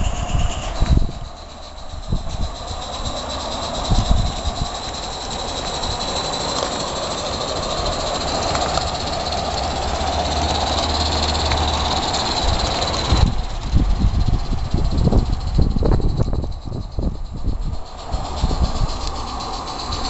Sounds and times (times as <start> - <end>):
Railroad car, train wagon: 0.0 - 20.0
Train: 0.0 - 20.0.